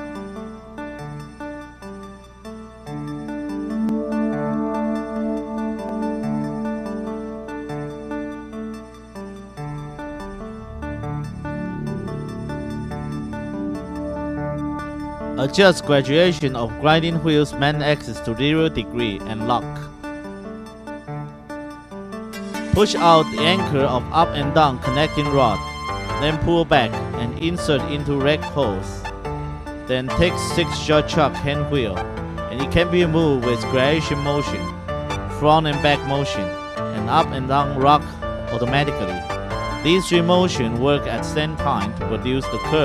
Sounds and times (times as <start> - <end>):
Music: 0.0 - 42.8.